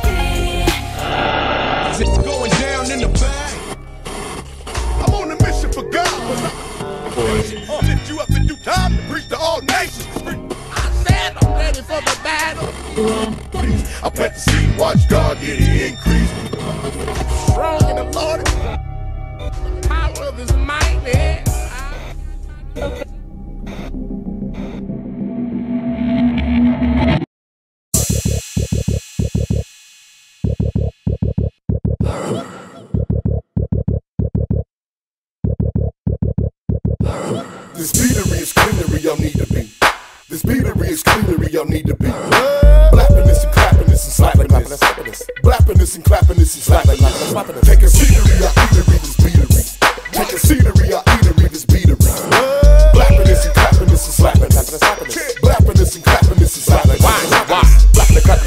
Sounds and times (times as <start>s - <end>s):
Hip hop music: 0.0s - 24.7s, 28.0s - 29.7s, 37.0s - 58.4s.